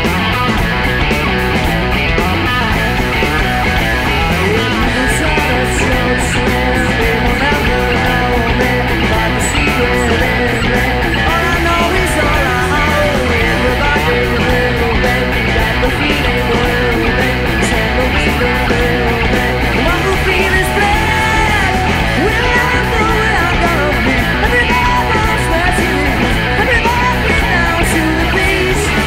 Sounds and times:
Pop music: 2.7 - 29.0.

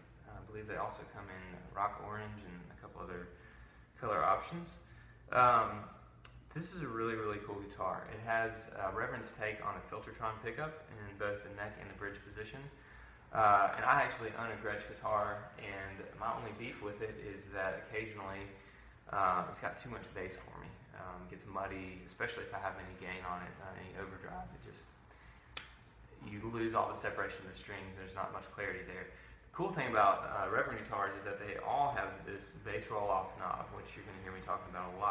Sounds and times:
Speech: 0.0 - 3.4, 4.0 - 25.1, 26.1 - 35.1.

